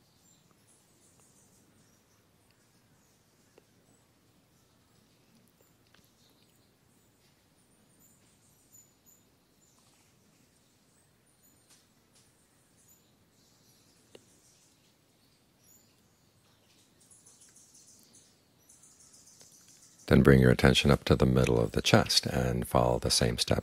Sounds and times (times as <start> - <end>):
Speech: 20.1 - 23.6.